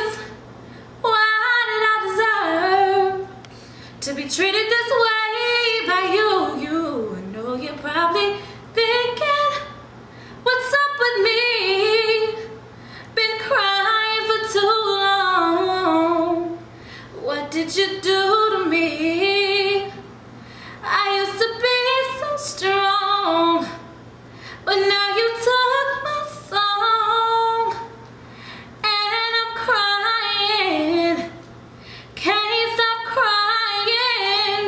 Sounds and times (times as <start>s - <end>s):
Female singing: 0.0s - 0.4s, 1.0s - 3.4s, 4.0s - 9.8s, 10.4s - 12.6s, 13.2s - 16.6s, 17.2s - 20.1s, 20.8s - 23.9s, 24.7s - 28.0s, 28.8s - 31.4s, 32.2s - 34.6s.